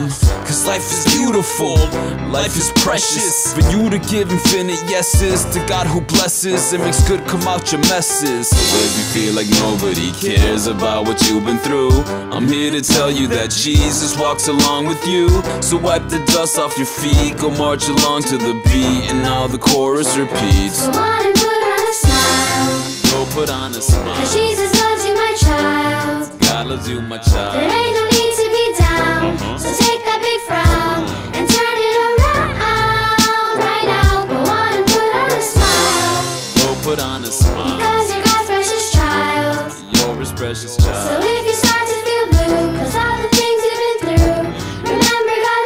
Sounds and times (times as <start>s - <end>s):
Music for children: 0.0s - 45.6s.